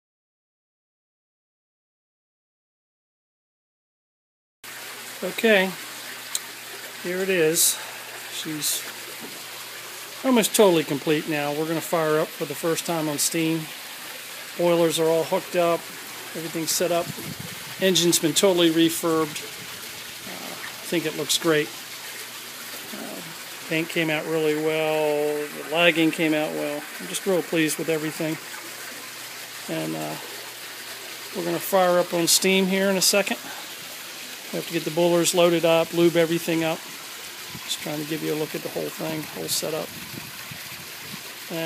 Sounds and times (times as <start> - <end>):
Speech: 5.2 - 5.8, 7.0 - 8.9, 10.2 - 13.8, 14.6 - 15.8, 16.4 - 17.1, 17.8 - 19.4, 20.3 - 21.7, 22.9 - 28.4, 29.7 - 30.3, 31.3 - 33.5, 34.5 - 36.8, 37.7 - 39.9.